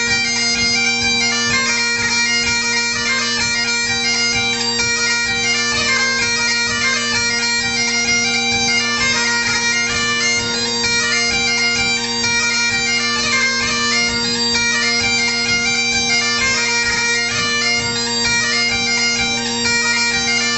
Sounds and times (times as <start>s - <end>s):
Bagpipes: 0.0s - 20.5s.